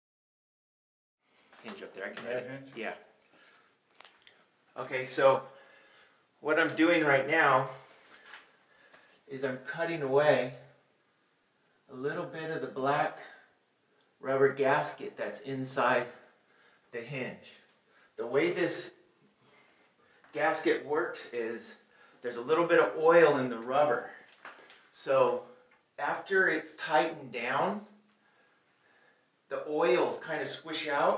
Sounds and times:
Speech: 0:01.6 - 0:03.1, 0:04.8 - 0:05.5, 0:06.4 - 0:07.8, 0:09.3 - 0:10.7, 0:11.9 - 0:13.5, 0:14.2 - 0:16.2, 0:16.9 - 0:19.0, 0:20.3 - 0:24.2, 0:24.9 - 0:27.9, 0:29.5 - 0:31.1.

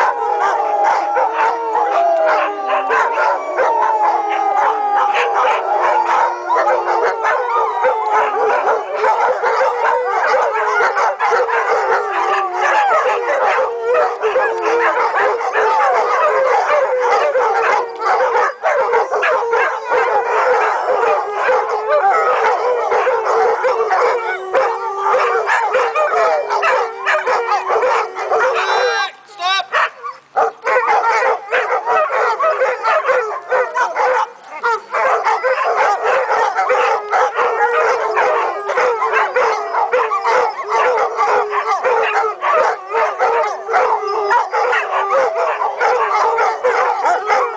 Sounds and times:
Bow-wow: 0:00.0 - 0:29.0, 0:29.7 - 0:47.5
Howl: 0:00.0 - 0:29.2, 0:29.8 - 0:47.5.

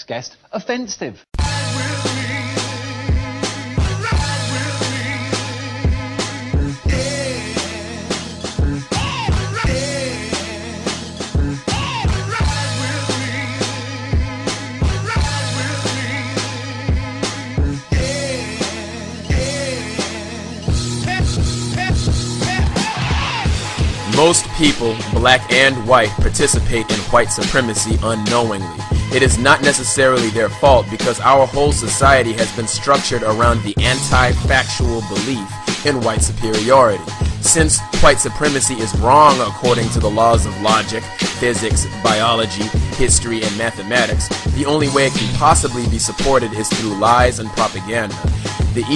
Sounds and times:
Music: 0:01.4 - 0:48.9.

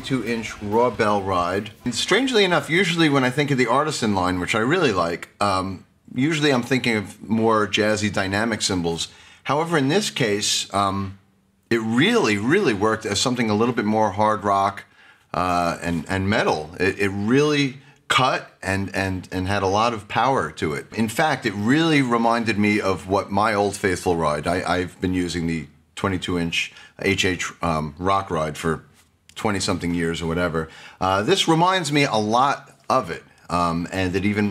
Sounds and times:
Speech: 0:00.0 - 0:34.5.

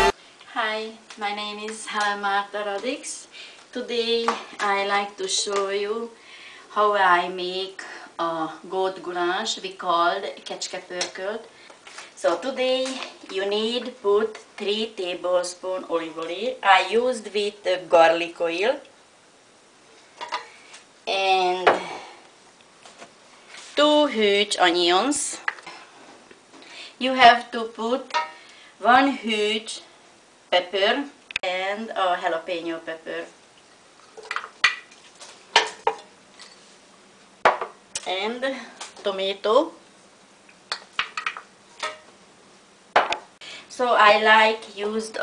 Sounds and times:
Speech: 0:00.0 - 0:11.5, 0:12.2 - 0:18.9, 0:21.1 - 0:22.1, 0:23.8 - 0:25.5, 0:27.0 - 0:28.2, 0:28.8 - 0:29.9, 0:30.5 - 0:33.4, 0:38.0 - 0:39.8, 0:43.7 - 0:45.2.

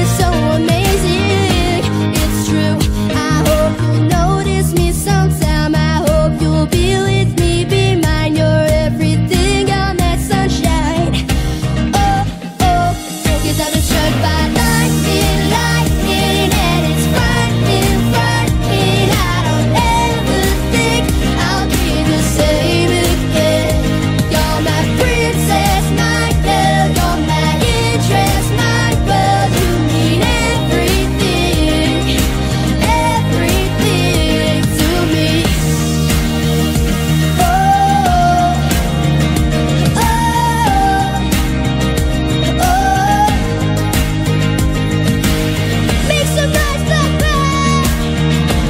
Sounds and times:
Music: 0:00.0 - 0:48.6.

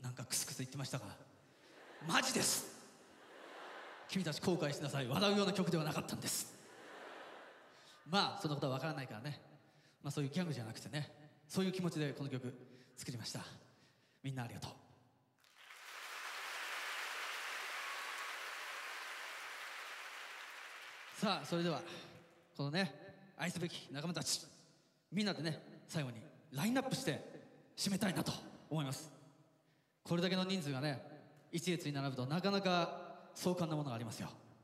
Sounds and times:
Speech: 0:00.0 - 0:01.3, 0:02.0 - 0:02.7, 0:04.1 - 0:06.5, 0:08.0 - 0:09.4, 0:10.0 - 0:13.6, 0:14.2 - 0:14.9, 0:21.2 - 0:24.5, 0:25.1 - 0:29.1, 0:30.1 - 0:34.4.

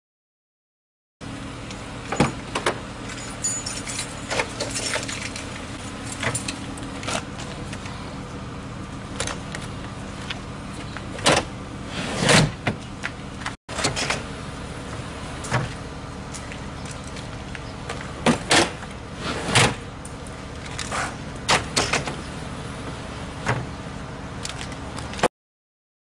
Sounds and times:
Car: 0:01.2 - 0:25.3.

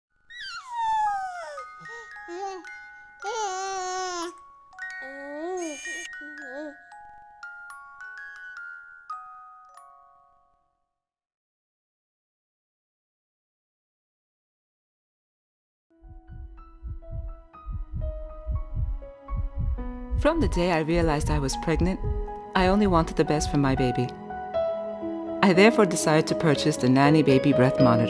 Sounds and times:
Glockenspiel: 0:00.2 - 0:11.1.

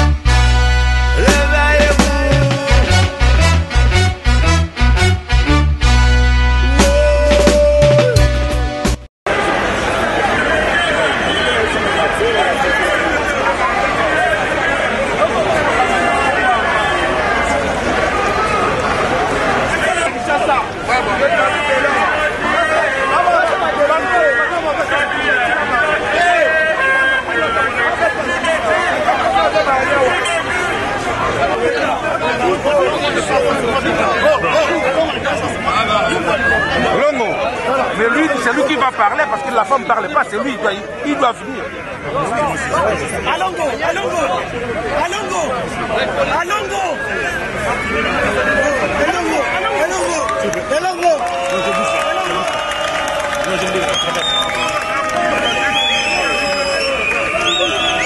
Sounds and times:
Speech: 0:09.9 - 0:52.6.

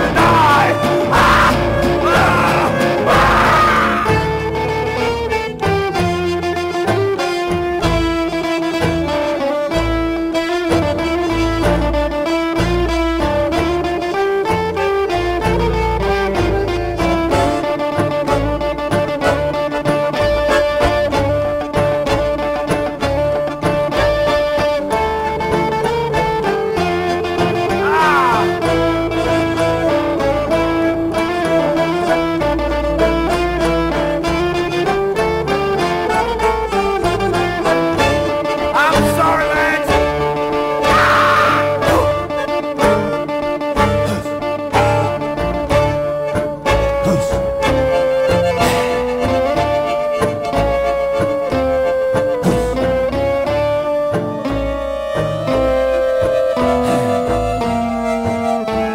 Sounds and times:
Orchestra: 0:00.0 - 0:58.9
String section: 0:00.0 - 0:58.9.

